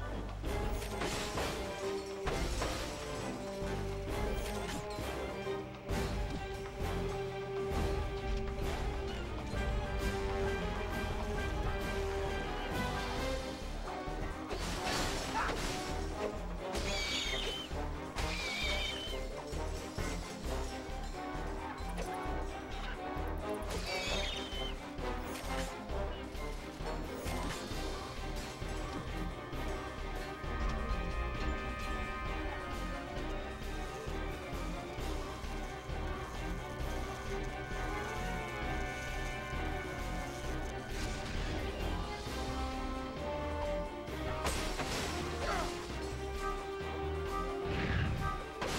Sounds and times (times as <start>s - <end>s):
Music: 0.0s - 48.7s.